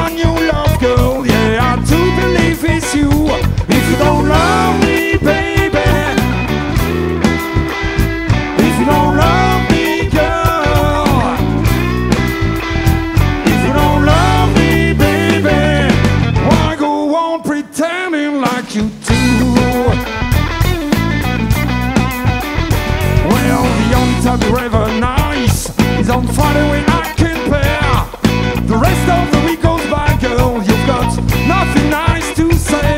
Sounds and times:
Singing: 0.0s - 6.4s, 8.6s - 11.7s, 13.4s - 20.0s, 23.2s - 28.1s
Guitar: 0.0s - 32.9s
Psychedelic rock: 0.0s - 32.9s.

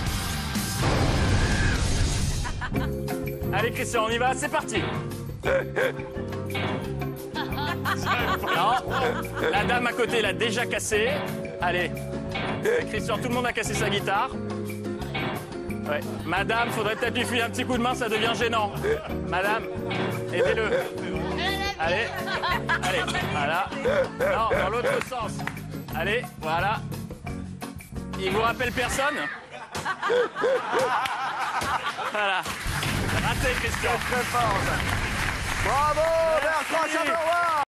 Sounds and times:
Music: 0.0s - 29.3s, 30.0s - 37.6s.

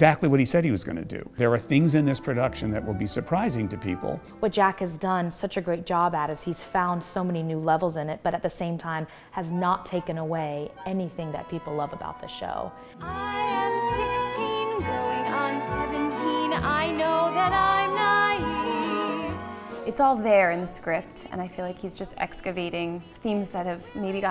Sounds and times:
Speech: 0.0s - 12.7s
Music: 0.0s - 24.3s.

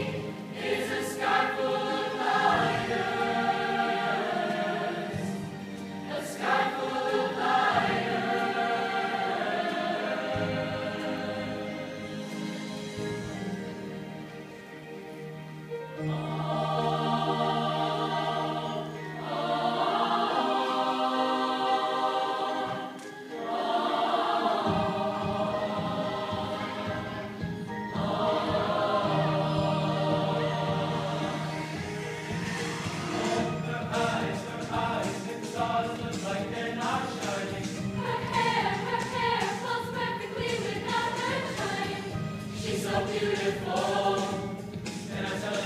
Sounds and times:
Music: 0.0s - 45.6s.

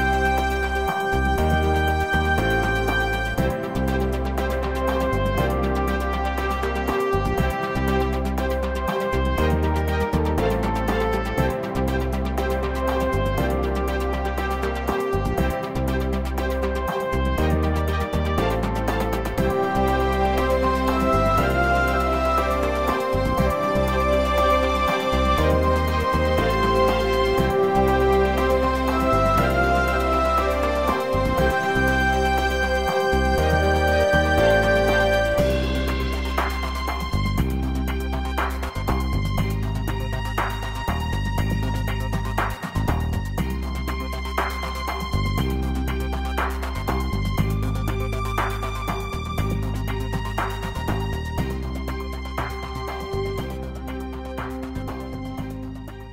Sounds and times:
Music: 0.0s - 56.1s.

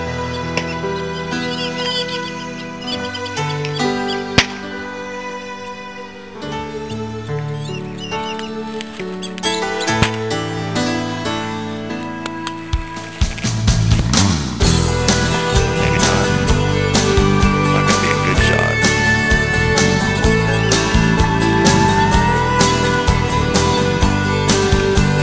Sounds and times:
Psychedelic rock: 8.6s - 25.2s
Speech: 15.8s - 16.4s, 17.7s - 19.0s.

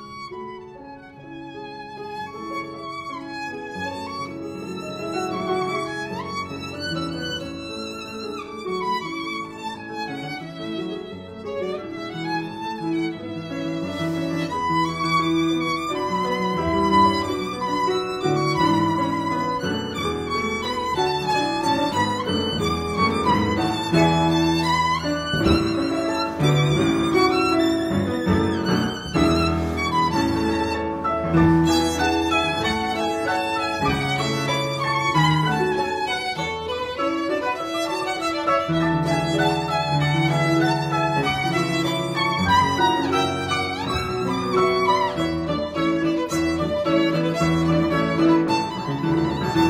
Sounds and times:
Violin, fiddle: 0.0s - 49.6s.

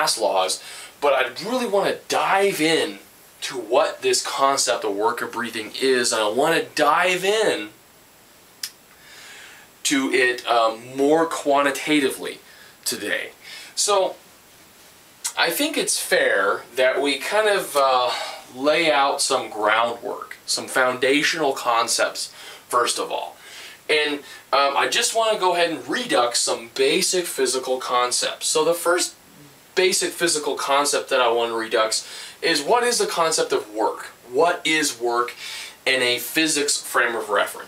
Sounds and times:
Speech: 0.0s - 7.8s, 9.8s - 14.2s, 15.3s - 37.6s.

